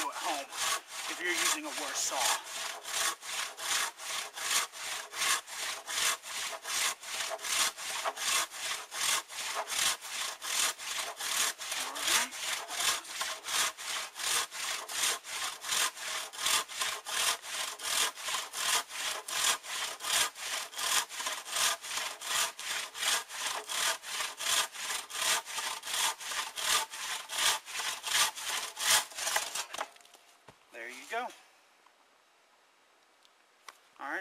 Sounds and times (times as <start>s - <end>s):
Sawing: 0.0s - 30.0s
Wood: 0.0s - 30.2s.